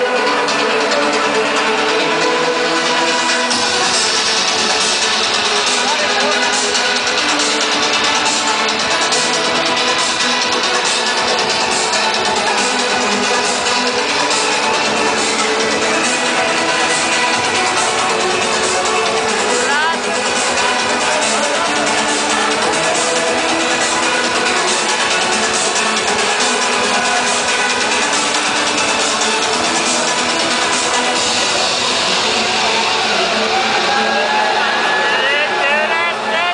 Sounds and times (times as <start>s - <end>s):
Music: 0.0s - 36.5s
Speech: 5.8s - 6.6s, 19.6s - 20.1s, 35.0s - 36.5s.